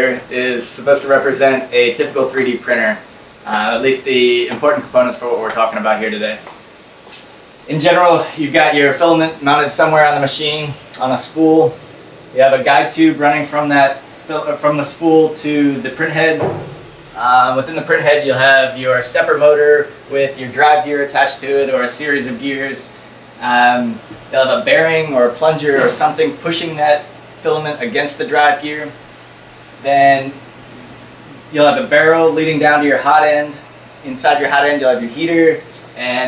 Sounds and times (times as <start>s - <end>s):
Speech: 0.0s - 6.5s, 7.6s - 11.8s, 12.4s - 29.0s, 29.8s - 30.4s, 31.5s - 36.2s.